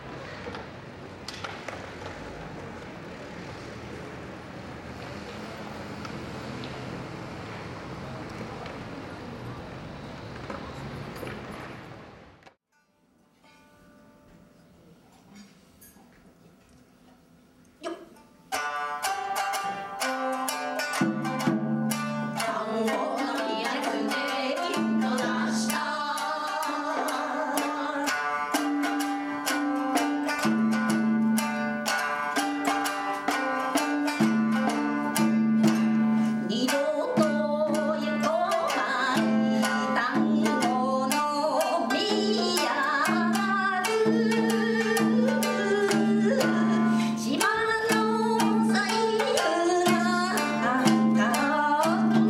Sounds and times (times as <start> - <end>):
Music: 12.7 - 15.0, 17.9 - 52.2.